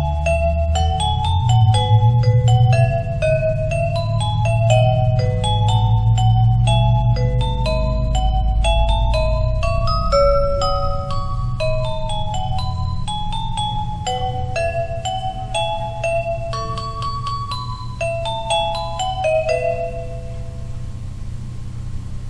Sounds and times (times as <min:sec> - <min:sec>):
Christmas music: 0:00.0 - 0:20.9.